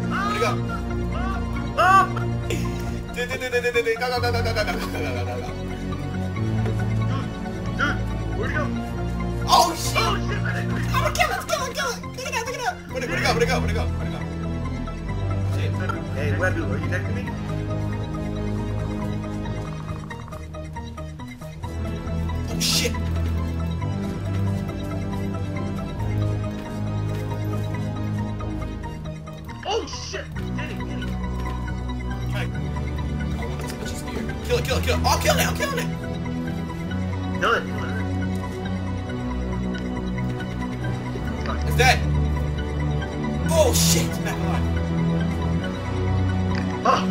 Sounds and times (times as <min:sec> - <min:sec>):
Music: 0:00.0 - 0:47.1
Speech: 0:43.5 - 0:44.6.